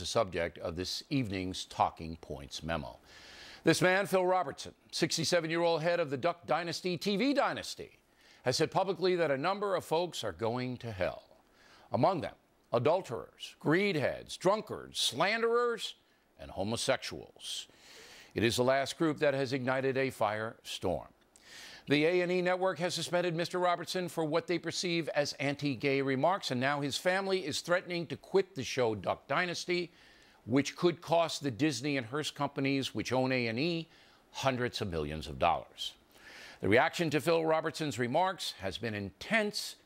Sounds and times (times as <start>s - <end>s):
Male speech, man speaking: 0.0s - 3.0s, 3.7s - 17.7s, 18.4s - 21.1s, 21.9s - 29.9s, 30.5s - 36.0s, 36.6s - 39.8s
Narration, monologue: 0.0s - 39.8s.